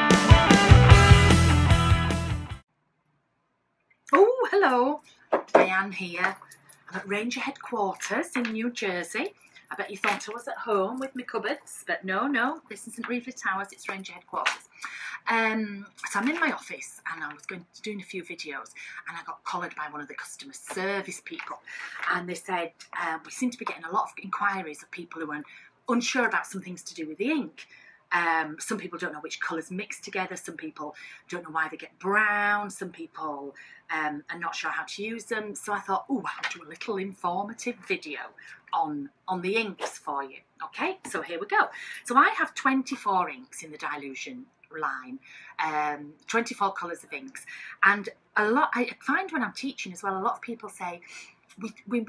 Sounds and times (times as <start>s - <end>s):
Speech: 4.1s - 52.0s.